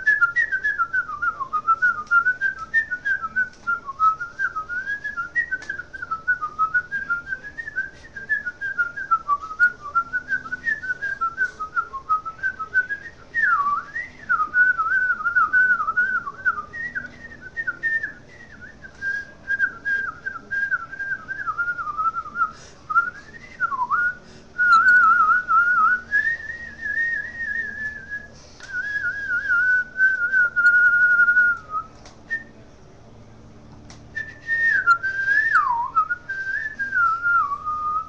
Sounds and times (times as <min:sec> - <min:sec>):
Whistling: 0:00.0 - 0:32.6, 0:34.1 - 0:38.0.